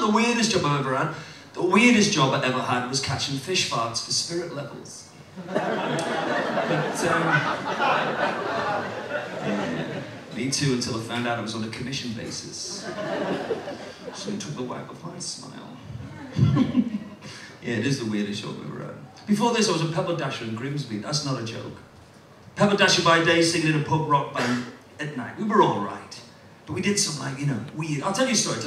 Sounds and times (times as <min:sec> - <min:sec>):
Speech: 0:00.0 - 0:05.1, 0:06.7 - 0:07.6, 0:09.4 - 0:12.9, 0:14.1 - 0:15.9, 0:17.6 - 0:21.9, 0:22.6 - 0:28.6.